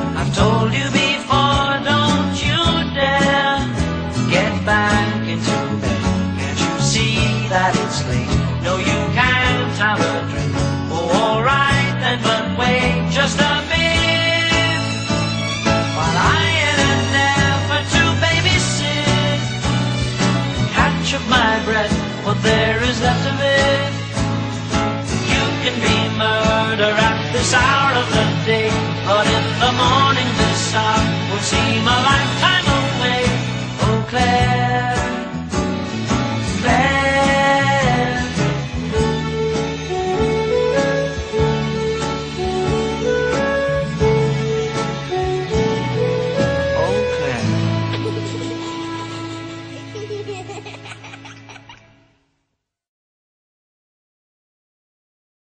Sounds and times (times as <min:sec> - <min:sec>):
Music: 0:00.0 - 0:52.5
Speech: 0:46.8 - 0:47.6.